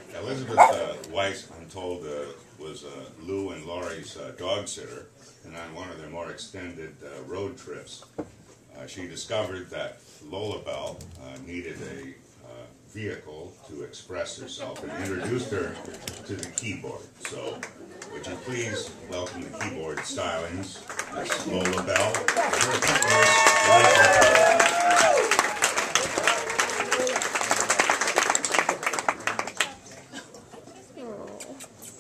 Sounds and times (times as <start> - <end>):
Speech: 8.7 - 23.9.